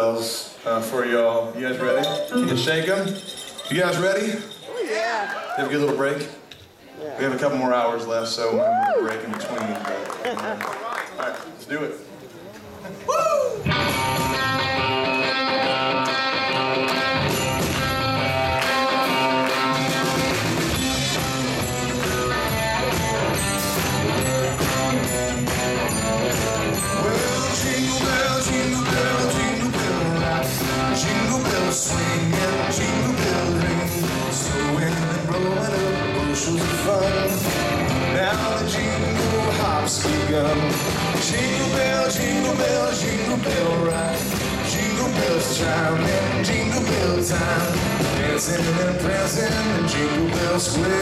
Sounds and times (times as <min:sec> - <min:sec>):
Speech: 0:00.0 - 0:10.1
Jingle (music): 0:01.8 - 0:04.8, 0:13.8 - 0:15.8, 0:17.0 - 0:51.0.